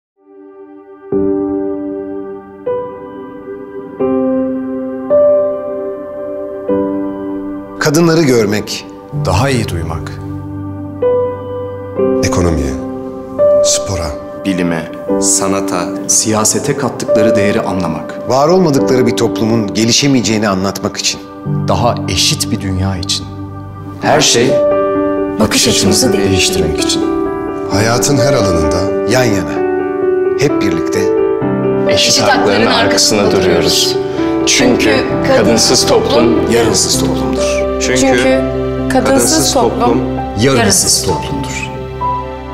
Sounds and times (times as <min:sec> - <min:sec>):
Music: 0:00.2 - 0:42.5.